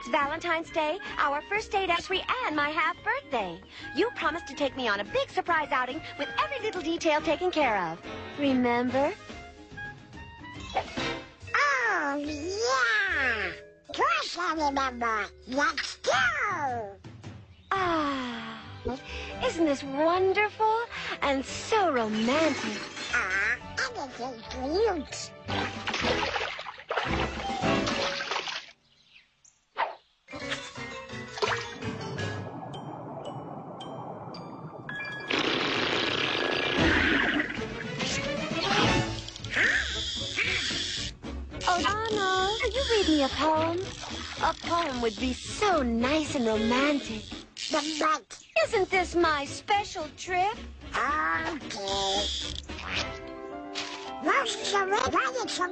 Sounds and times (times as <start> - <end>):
Speech: 0.0 - 9.2, 11.6 - 17.0, 17.7 - 25.3, 41.6 - 52.4, 54.2 - 55.7
Music: 0.0 - 28.3, 30.3 - 55.7.